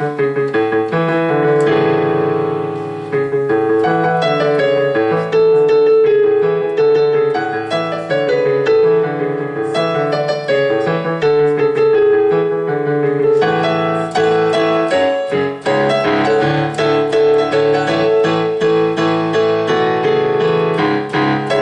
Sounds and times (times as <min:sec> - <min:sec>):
Music: 0:00.0 - 0:21.6.